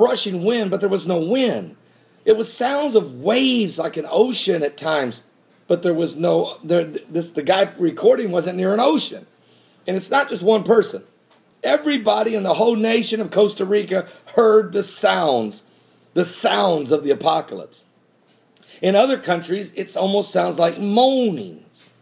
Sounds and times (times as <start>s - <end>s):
Speech: 0.0s - 9.3s, 9.9s - 17.9s, 18.8s - 22.0s.